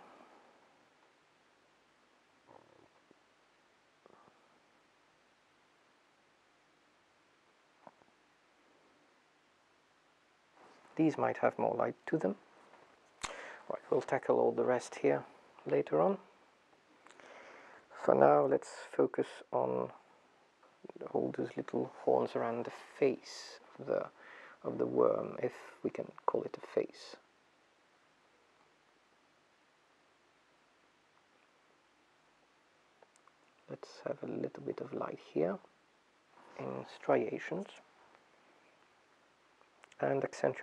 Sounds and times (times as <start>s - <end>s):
Speech: 11.0s - 12.4s, 13.2s - 16.3s, 17.9s - 20.0s, 20.8s - 27.3s, 33.7s - 35.7s, 36.6s - 37.9s, 40.0s - 40.6s.